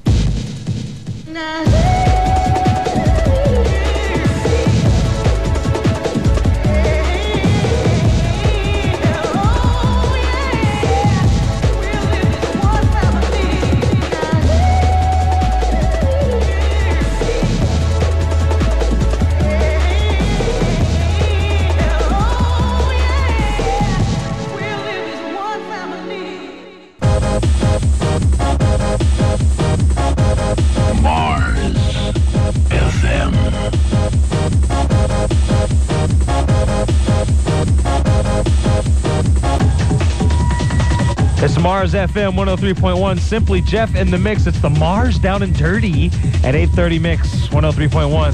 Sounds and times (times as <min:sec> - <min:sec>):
Techno: 0:00.0 - 0:25.0, 0:27.0 - 0:48.3
Speech: 0:31.0 - 0:33.6, 0:41.4 - 0:48.3.